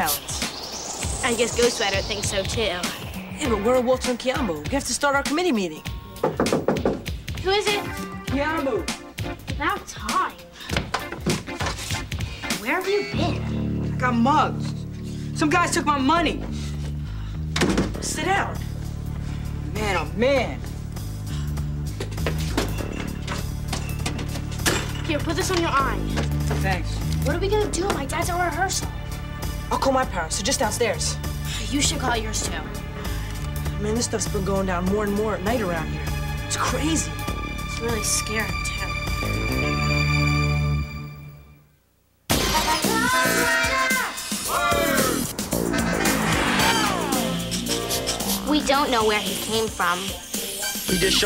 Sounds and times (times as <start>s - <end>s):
Music: 0.0s - 51.2s.